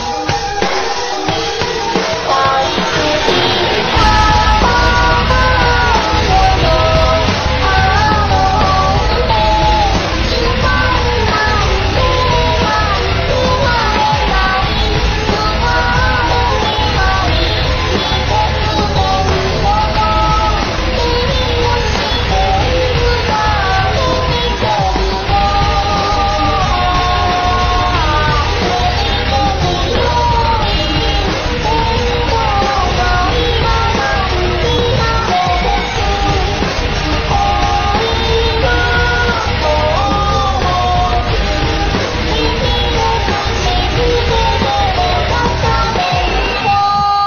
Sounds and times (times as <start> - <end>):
Music: 0.0 - 47.2.